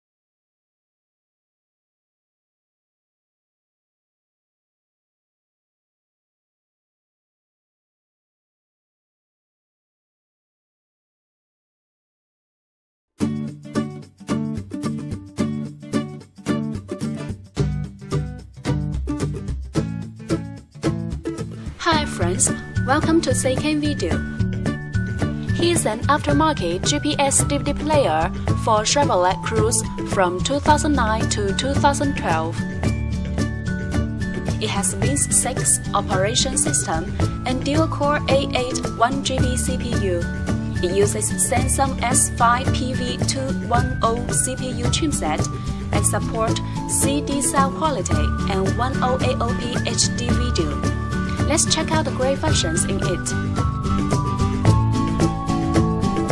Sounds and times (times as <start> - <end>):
Music: 13.2 - 56.3
Speech: 21.8 - 24.2, 25.5 - 32.6, 34.6 - 53.4.